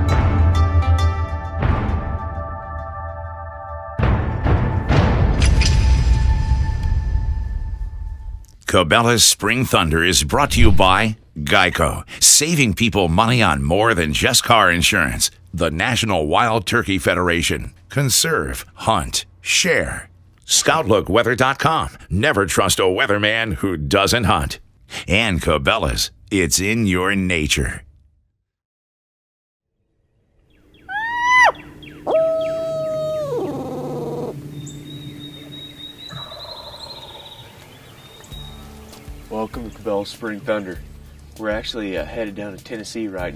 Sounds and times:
Speech: 0:08.7 - 0:27.9, 0:39.3 - 0:40.8, 0:41.4 - 0:43.3.

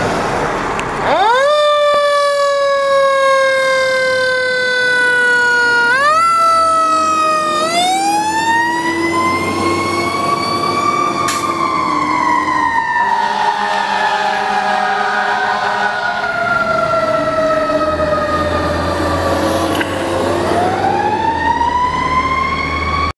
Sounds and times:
Car: 0:00.0 - 0:01.4, 0:16.5 - 0:23.1
Truck: 0:00.0 - 0:23.1.

